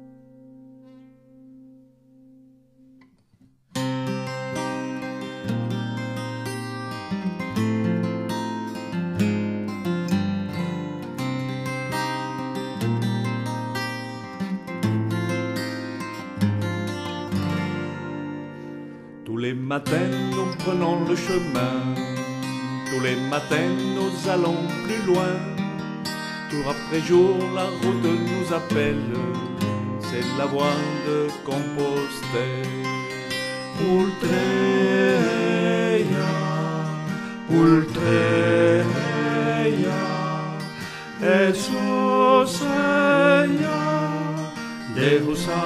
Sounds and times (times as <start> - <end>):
Music: 0.0 - 45.6.